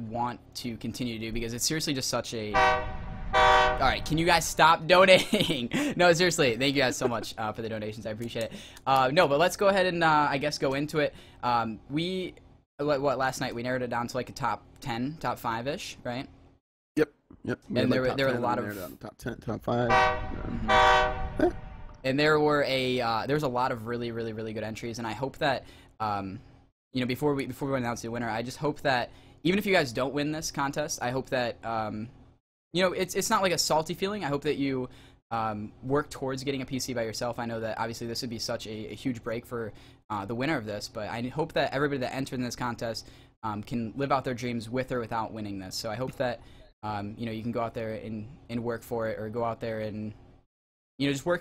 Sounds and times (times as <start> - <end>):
Speech: 0.0 - 2.6, 3.8 - 16.3, 17.0 - 20.7, 22.1 - 26.4, 27.0 - 32.1, 32.8 - 50.2, 51.0 - 51.4.